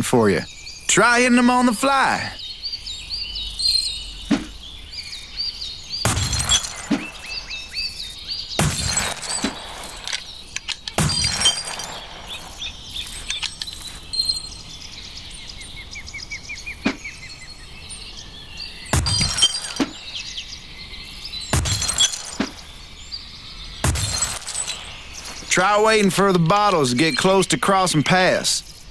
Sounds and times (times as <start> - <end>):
Chirp, tweet: 0.0 - 28.9.